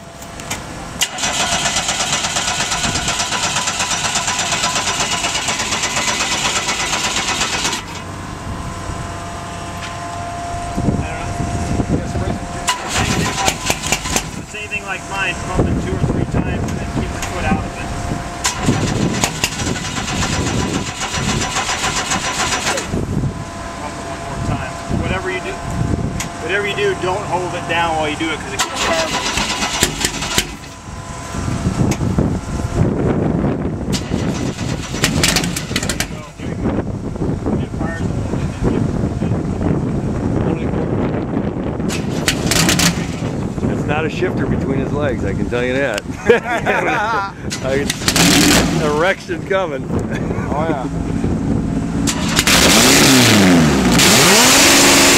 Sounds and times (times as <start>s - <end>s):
Speech: 11.0s - 13.6s, 14.4s - 17.9s, 23.8s - 25.6s, 26.4s - 29.1s, 36.0s - 36.7s, 37.6s - 39.5s, 43.7s - 46.0s, 46.8s - 47.9s, 48.8s - 50.9s.